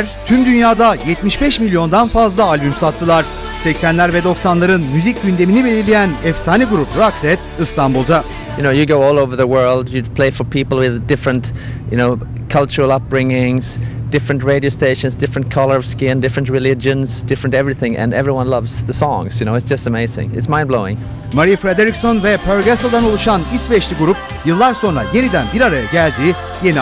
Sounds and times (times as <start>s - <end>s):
Speech: 0.0s - 26.8s.